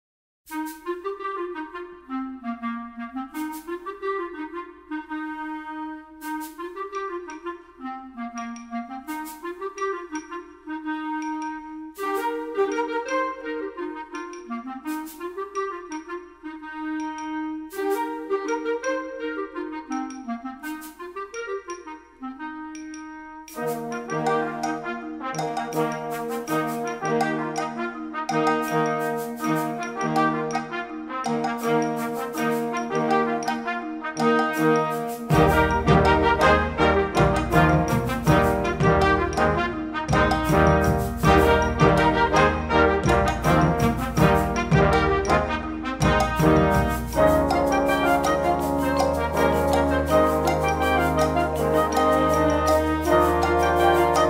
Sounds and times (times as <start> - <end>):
Music: 0.5 - 54.3.